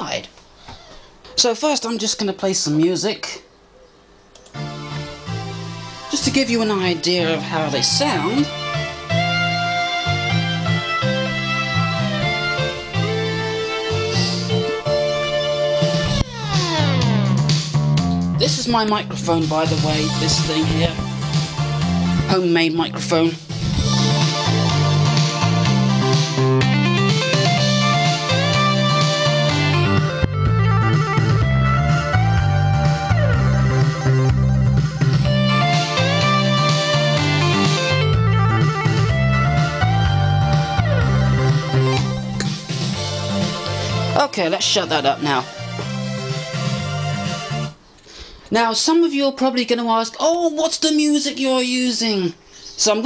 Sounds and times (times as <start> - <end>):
Speech: 0.0 - 0.4, 1.3 - 3.4, 6.1 - 8.5, 18.4 - 21.0, 22.3 - 23.5, 44.2 - 45.5, 48.5 - 53.0
Music: 4.4 - 47.9.